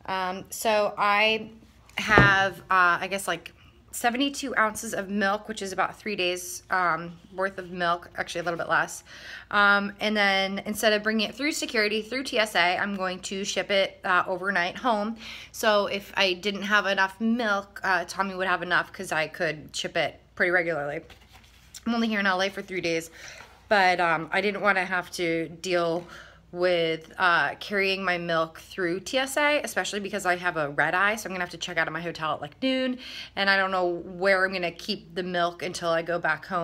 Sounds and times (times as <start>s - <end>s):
Speech: 0.0s - 21.1s, 23.7s - 36.6s.